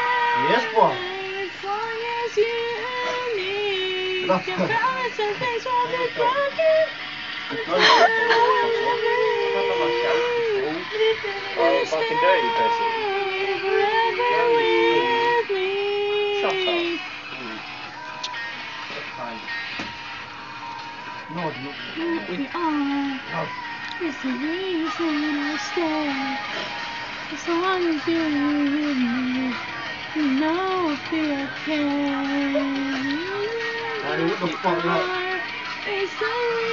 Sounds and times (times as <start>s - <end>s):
Female singing: 0.0s - 17.1s, 21.3s - 36.7s
Music: 0.0s - 36.7s.